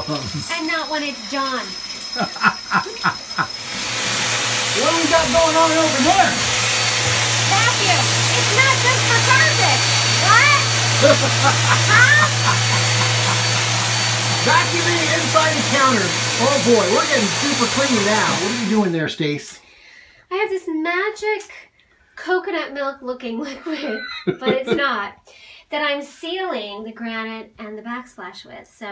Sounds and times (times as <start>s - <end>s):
Speech: 0.0s - 1.6s, 14.4s - 19.6s, 24.4s - 25.2s.